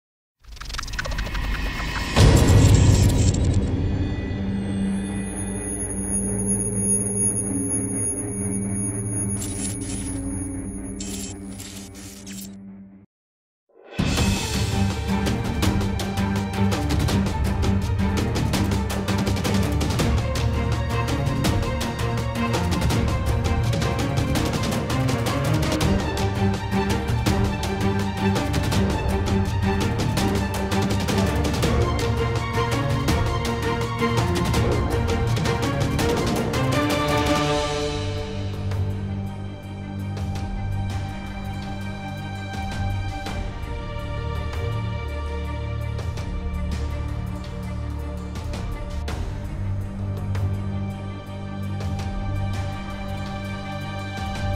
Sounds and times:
Music: 0.8s - 13.1s, 13.7s - 54.5s.

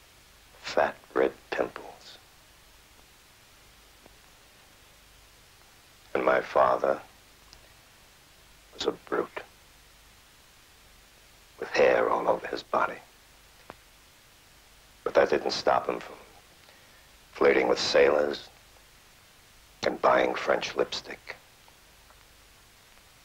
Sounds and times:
Speech: 0.6s - 2.2s, 6.1s - 7.1s, 8.8s - 9.5s, 11.6s - 13.1s, 15.1s - 16.3s, 17.4s - 18.6s, 19.8s - 21.4s.

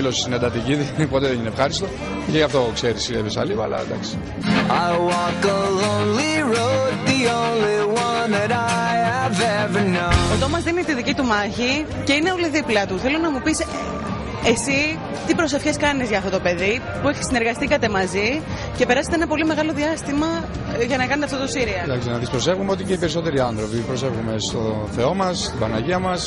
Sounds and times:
Music: 0.0s - 26.2s.

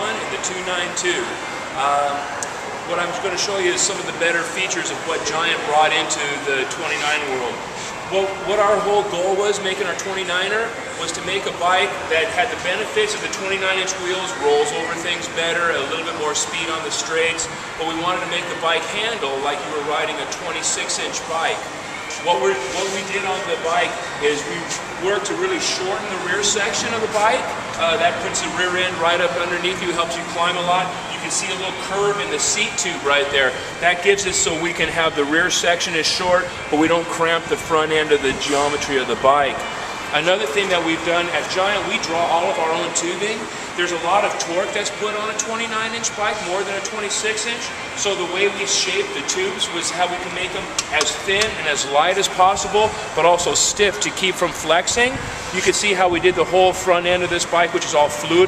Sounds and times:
Speech: 0.0s - 2.3s, 2.9s - 58.4s.

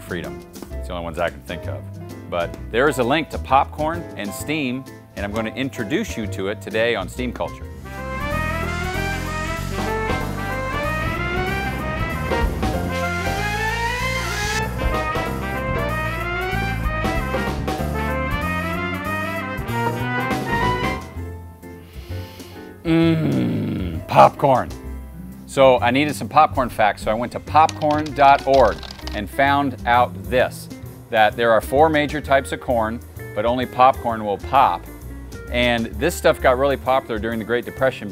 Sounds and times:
Speech: 0.0s - 7.6s, 24.1s - 24.8s, 25.5s - 34.9s, 35.5s - 38.1s
Music: 0.0s - 38.1s.

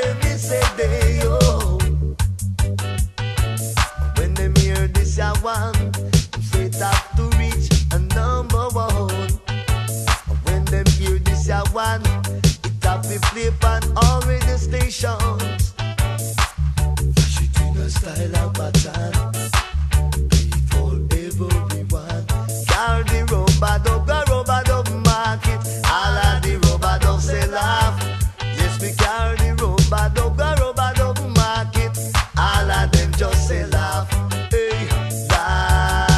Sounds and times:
Reggae: 0.0s - 36.1s.

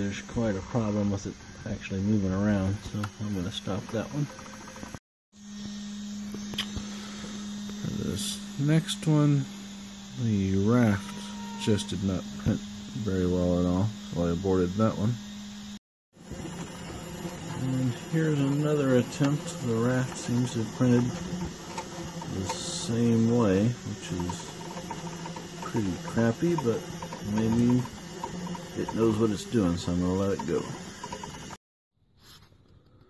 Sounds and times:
Speech: 0.0s - 4.3s, 7.8s - 9.5s, 10.2s - 15.2s, 17.5s - 21.4s, 22.2s - 24.6s, 25.6s - 28.0s, 28.8s - 30.8s
Printer: 2.3s - 5.0s, 5.6s - 15.2s, 16.2s - 31.6s.

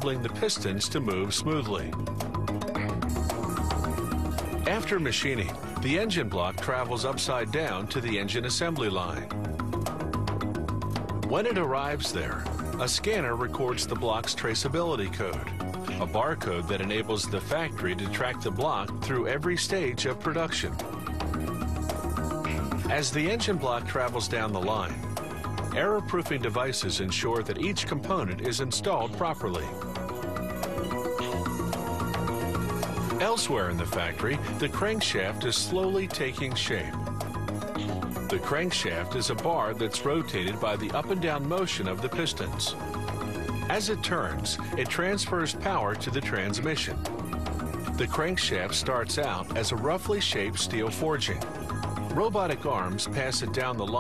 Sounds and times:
Speech: 0.0s - 2.0s, 4.7s - 9.3s, 11.3s - 20.8s, 22.9s - 25.0s, 25.8s - 29.8s, 33.2s - 37.0s, 38.3s - 42.8s, 43.7s - 47.0s, 48.0s - 51.5s, 52.1s - 54.0s
Music: 0.0s - 54.0s.

